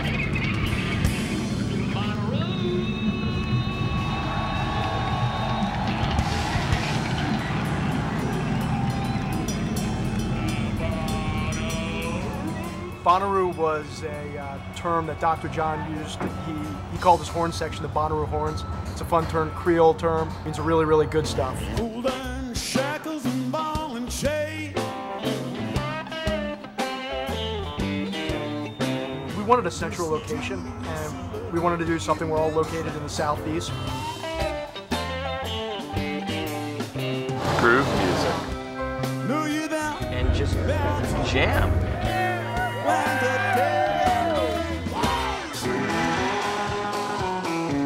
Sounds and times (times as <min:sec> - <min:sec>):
Speech: 0:13.1 - 0:21.9, 0:29.3 - 0:33.8, 0:37.5 - 0:38.4, 0:40.0 - 0:41.8
Jazz: 0:21.2 - 0:47.8.